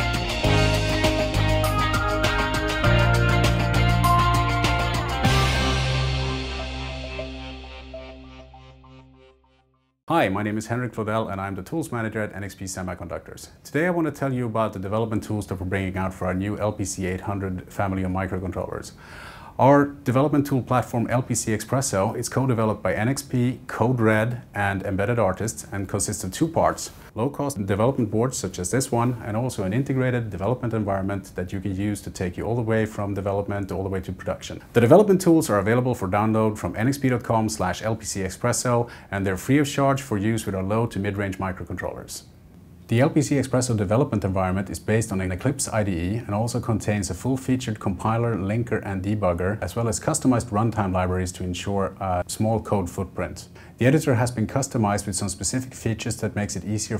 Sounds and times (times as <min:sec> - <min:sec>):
Speech: 0:10.1 - 0:19.0, 0:19.6 - 0:42.3, 0:42.9 - 0:56.9.